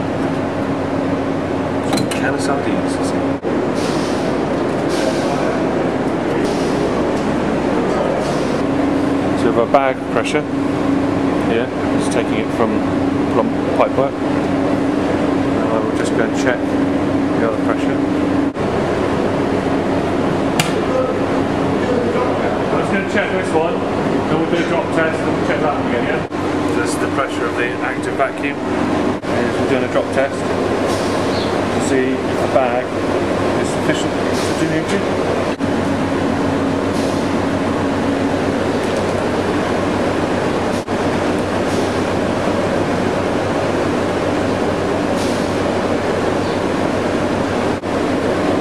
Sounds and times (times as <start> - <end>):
Air conditioning: 0.0 - 48.6
Speech: 1.9 - 3.3, 9.4 - 10.5, 11.4 - 14.2, 15.5 - 16.7, 17.3 - 18.1, 20.8 - 28.6, 29.2 - 30.5, 31.8 - 32.9, 33.6 - 35.1.